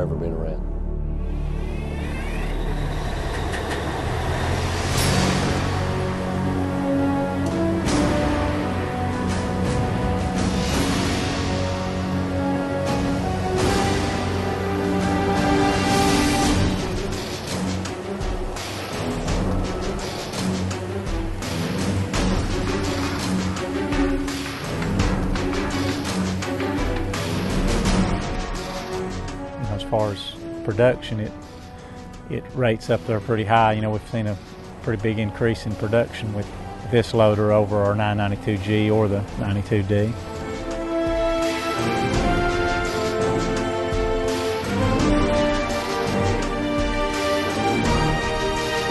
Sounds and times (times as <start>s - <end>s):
Music: 0.0s - 48.9s.